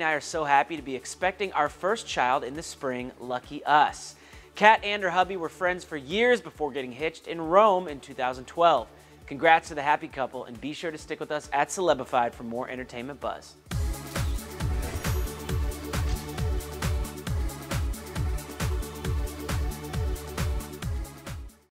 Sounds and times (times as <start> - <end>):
Speech: 0.0 - 13.6
Music: 0.0 - 21.7.